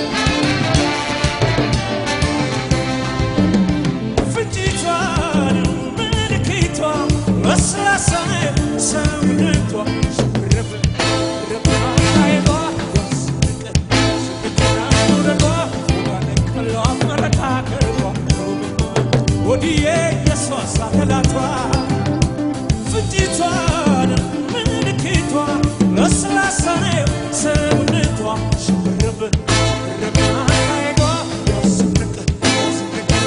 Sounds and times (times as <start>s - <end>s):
Pop music: 0.0s - 33.2s.